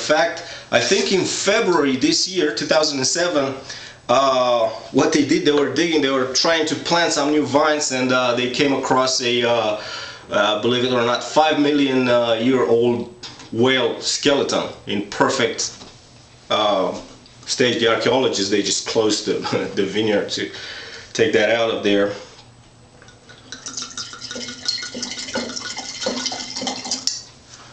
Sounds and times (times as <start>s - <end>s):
Water tap, faucet: 23.5s - 27.2s.